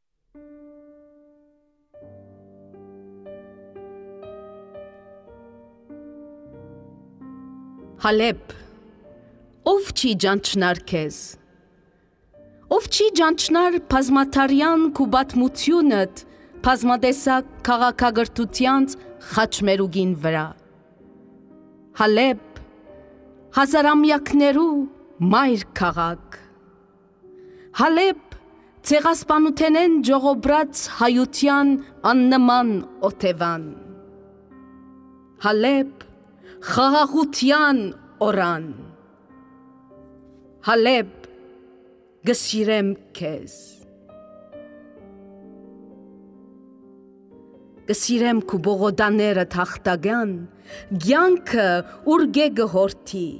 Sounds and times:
Music: 0:00.0 - 0:53.4
Speech: 0:08.0 - 0:08.6, 0:09.7 - 0:11.4, 0:12.7 - 0:20.6, 0:22.0 - 0:22.6, 0:23.6 - 0:26.4, 0:27.8 - 0:28.2, 0:28.8 - 0:33.8, 0:35.4 - 0:36.0, 0:36.6 - 0:38.9, 0:40.6 - 0:41.3, 0:42.2 - 0:43.8, 0:47.9 - 0:53.4.

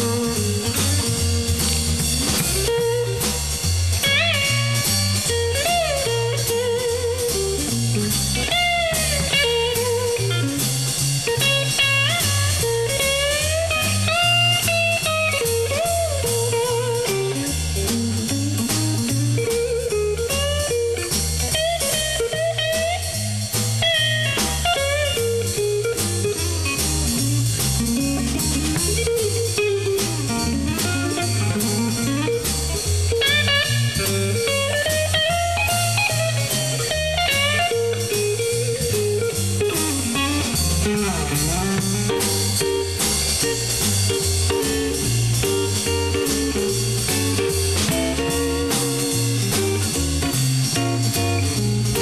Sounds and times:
Blues: 0:00.0 - 0:52.0
Strum: 0:00.0 - 0:52.0.

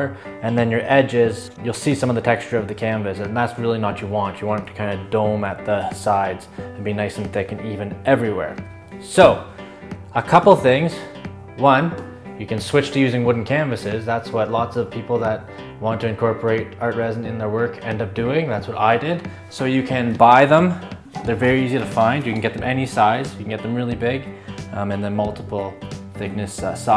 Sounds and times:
Speech: 0:00.0 - 0:09.5, 0:10.2 - 0:26.9
Music: 0:00.0 - 0:26.9.

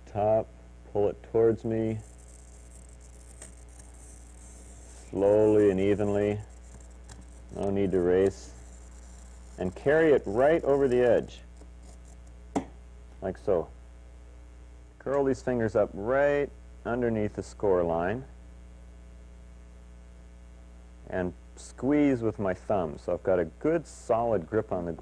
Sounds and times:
Speech: 0:00.0 - 0:02.0, 0:05.1 - 0:06.5, 0:07.6 - 0:08.6, 0:09.6 - 0:11.5, 0:13.2 - 0:13.8, 0:15.0 - 0:18.4, 0:21.1 - 0:25.0.

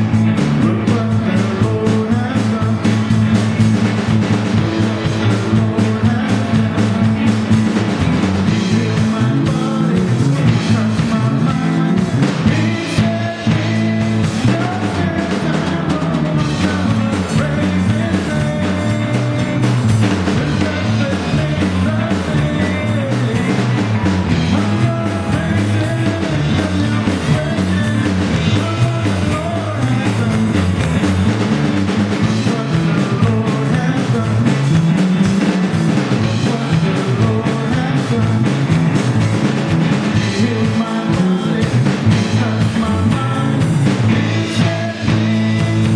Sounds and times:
Music: 0:00.0 - 0:45.9.

